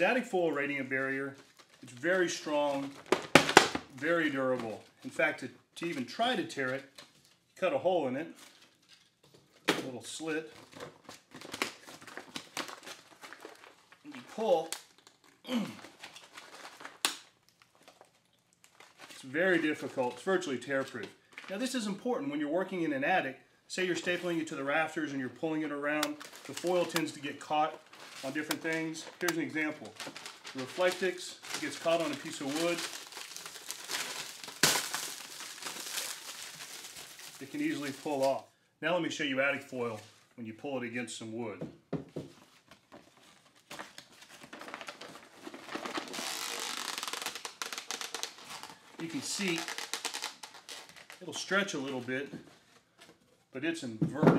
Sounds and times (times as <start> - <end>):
Crackle: 10.6 - 20.1, 25.9 - 38.4, 43.4 - 51.5.